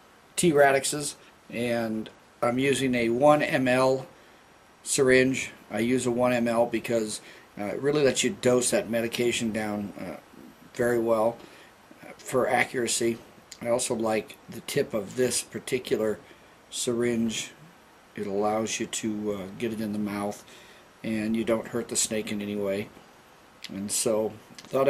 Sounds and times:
Inside, small room: 0.0s - 24.8s
Speech: 0.4s - 4.1s, 4.8s - 11.4s, 12.0s - 23.0s, 23.6s - 24.8s.

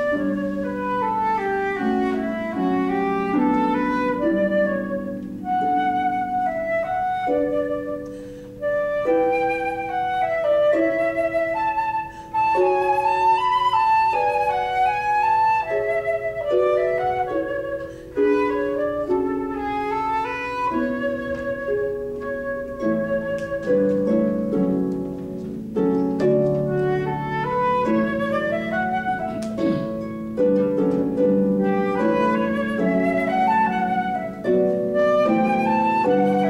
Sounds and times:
Flute: 0.0s - 36.5s.

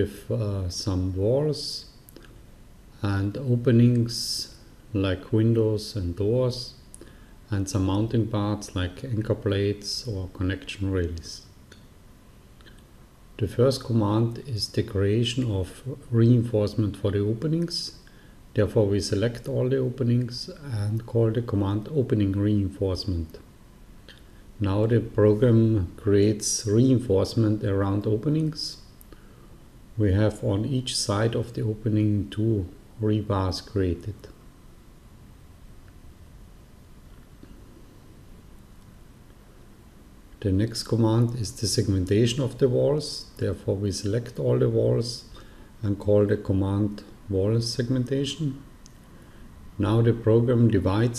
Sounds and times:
Speech: 0.0s - 1.9s, 3.0s - 6.8s, 7.5s - 11.5s, 13.4s - 18.0s, 18.6s - 23.5s, 24.6s - 28.9s, 30.0s - 34.4s, 40.4s - 48.7s, 49.8s - 51.1s.

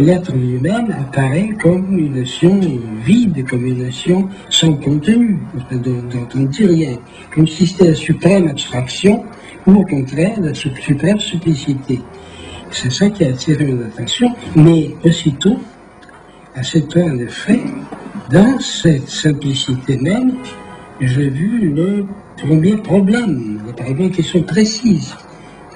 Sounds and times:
Speech: 0.0s - 15.8s, 16.6s - 25.3s.

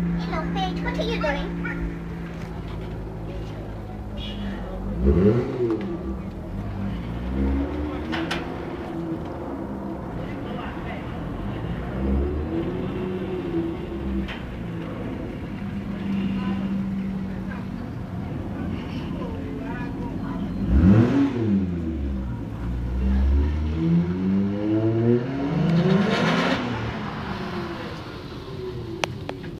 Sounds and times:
Speech: 0.2s - 1.9s, 10.2s - 11.2s, 15.9s - 20.7s.

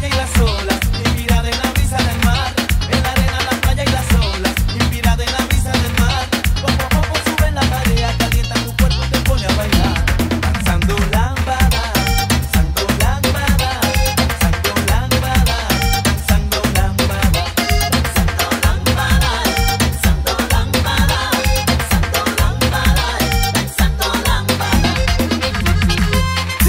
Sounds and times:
Music: 0.0s - 26.6s.

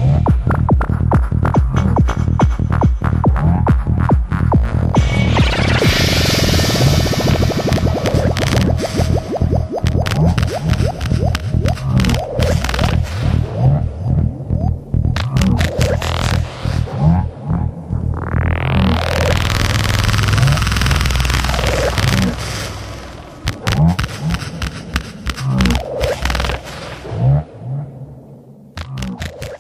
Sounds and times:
Techno: 0.0s - 27.6s, 28.8s - 29.6s.

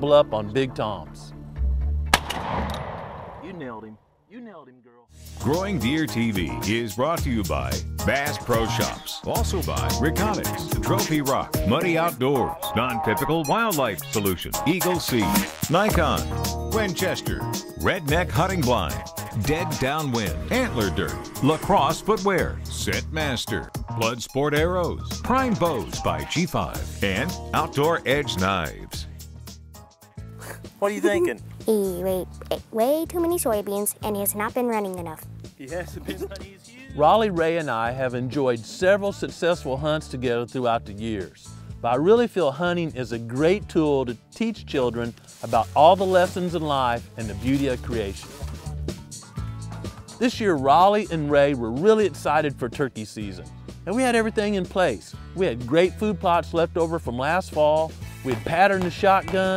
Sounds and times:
Speech: 0.0s - 1.3s, 3.4s - 29.1s, 30.8s - 48.3s, 50.2s - 59.5s
Music: 0.0s - 2.6s, 4.4s - 59.5s.

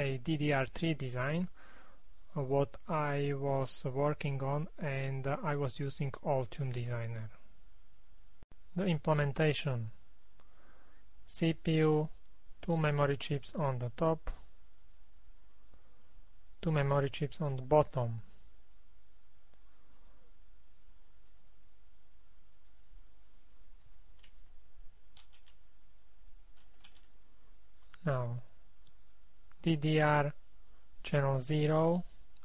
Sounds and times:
Speech: 0.0s - 1.5s, 2.3s - 7.4s, 8.7s - 10.0s, 11.3s - 14.4s, 16.6s - 18.3s, 28.0s - 28.5s, 29.6s - 30.4s, 31.0s - 32.1s.

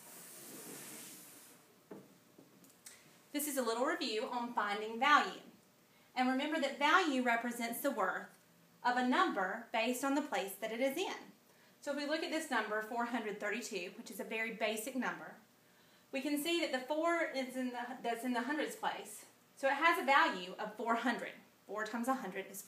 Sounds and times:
Speech: 3.4s - 5.5s, 6.2s - 15.4s, 16.2s - 22.6s.

